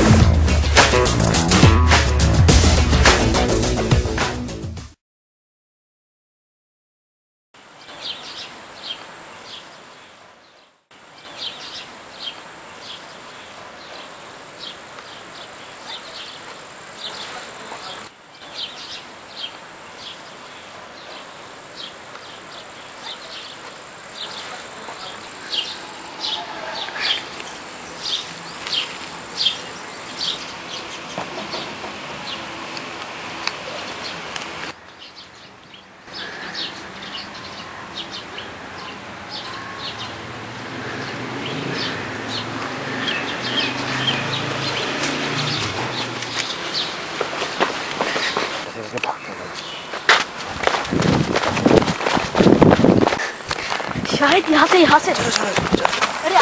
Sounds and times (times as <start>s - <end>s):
Outside, rural or natural: 0.0s - 4.6s, 7.6s - 56.4s
Outside, urban or manmade: 0.0s - 5.0s, 7.6s - 56.4s.